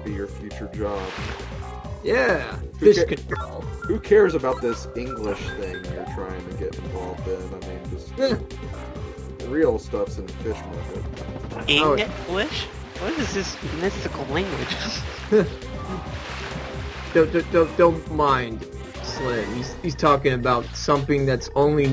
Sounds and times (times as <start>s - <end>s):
Speech: 0.0s - 1.2s, 2.0s - 8.4s, 9.4s - 11.0s, 11.7s - 16.0s, 17.2s - 21.9s
Music: 0.0s - 21.9s.